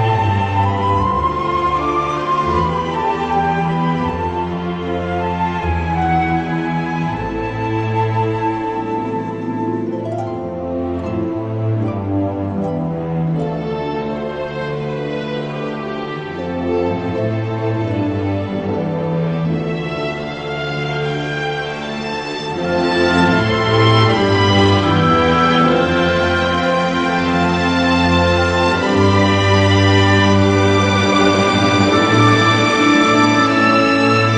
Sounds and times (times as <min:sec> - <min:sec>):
Theme music: 0:00.0 - 0:34.3.